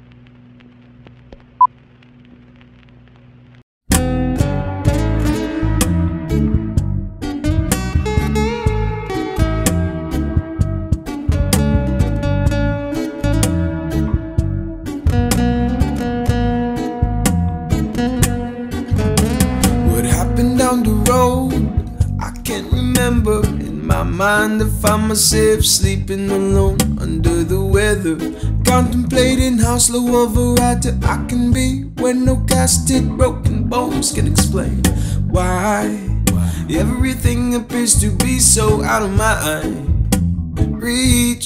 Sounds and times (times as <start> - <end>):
Soul music: 3.9 - 41.4.